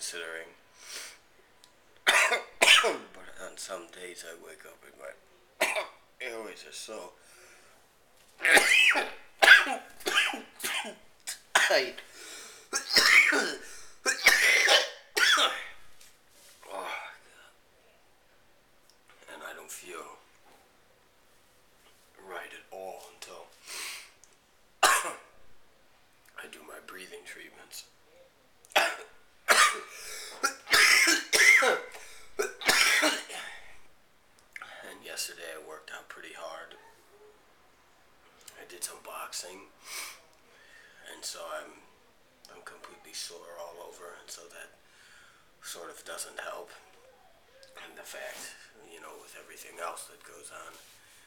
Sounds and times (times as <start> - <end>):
Speech: 0.0 - 0.6, 2.9 - 5.5, 6.2 - 7.2, 11.7 - 12.0, 19.2 - 20.2, 22.1 - 23.6, 26.3 - 27.9, 34.6 - 37.1, 38.5 - 39.7, 41.0 - 44.8, 45.6 - 50.9
Breathing: 0.7 - 1.2, 7.2 - 7.9, 12.0 - 12.7, 29.9 - 30.4, 32.0 - 32.4, 39.8 - 41.0, 44.8 - 45.6, 50.8 - 51.2
Cough: 2.0 - 3.2, 5.6 - 6.0, 8.4 - 12.0, 12.7 - 15.8, 24.8 - 25.3, 28.7 - 33.7.